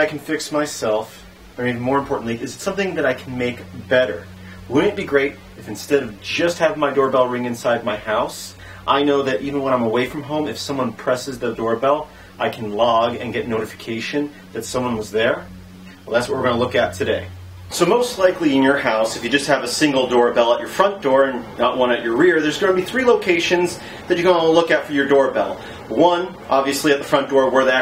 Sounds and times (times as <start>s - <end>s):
Speech: 0.0s - 15.5s, 16.1s - 27.8s.